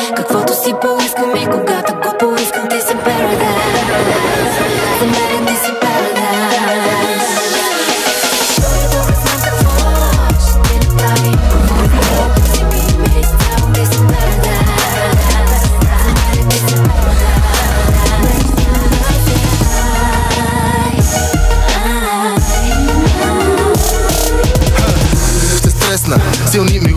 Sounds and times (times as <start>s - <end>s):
Hip hop music: 0.0s - 26.9s
Rhythm and blues: 0.0s - 26.9s.